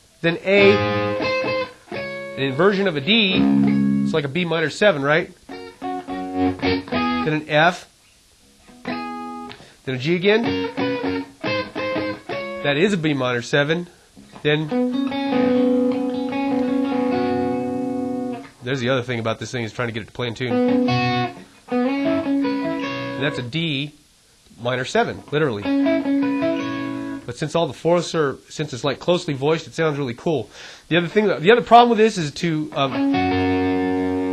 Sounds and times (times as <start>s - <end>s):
Guitar: 0.0s - 30.3s, 30.9s - 34.3s
Speech: 0.2s - 0.8s, 2.4s - 3.4s, 4.1s - 5.4s, 7.2s - 7.9s, 9.9s - 10.5s, 12.6s - 14.8s, 18.6s - 20.6s, 23.2s - 24.0s, 24.6s - 25.7s, 27.3s - 33.0s.